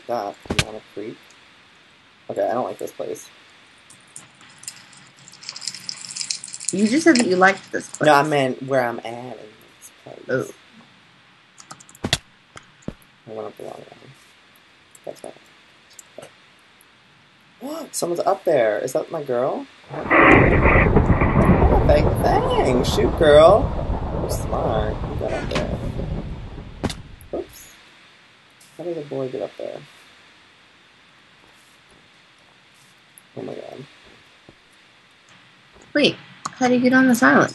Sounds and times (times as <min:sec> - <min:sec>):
Speech: 0:00.0 - 0:01.2, 0:02.3 - 0:03.3, 0:06.7 - 0:10.6, 0:13.3 - 0:14.2, 0:15.1 - 0:15.4, 0:17.6 - 0:20.8, 0:21.4 - 0:25.9, 0:27.4 - 0:27.7, 0:28.8 - 0:29.9, 0:33.4 - 0:33.9, 0:35.9 - 0:37.5.